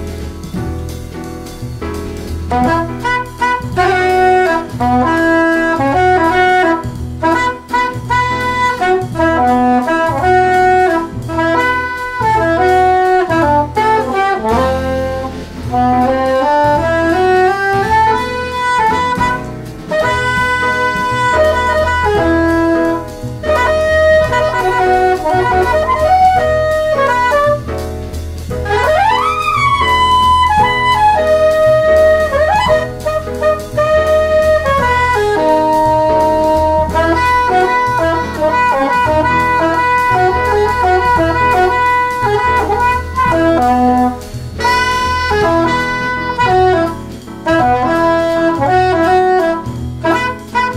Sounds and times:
Wind instrument, woodwind instrument: 0:02.5 - 0:27.9, 0:28.6 - 0:50.7.

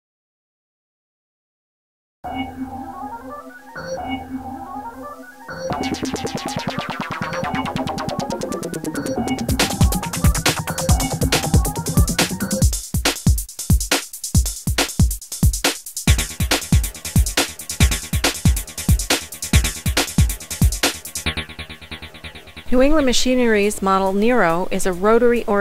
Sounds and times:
Drum machine: 0:05.7 - 0:22.8.

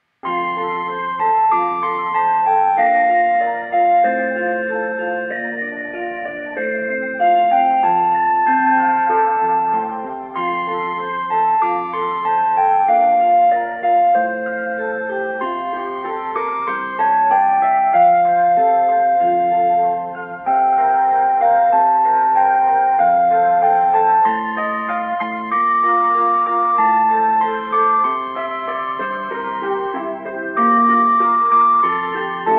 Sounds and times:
Electric piano: 0:00.2 - 0:32.5.

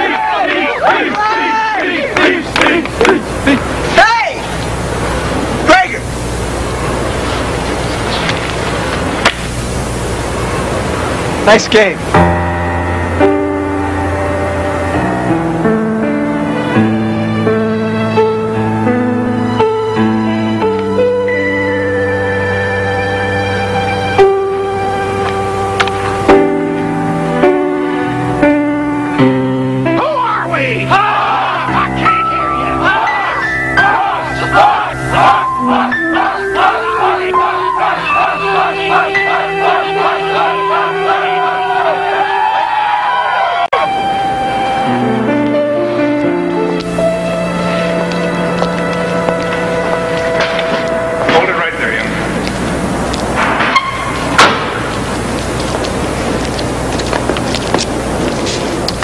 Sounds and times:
Speech: 0:11.4 - 0:12.0
Music: 0:12.1 - 0:52.5.

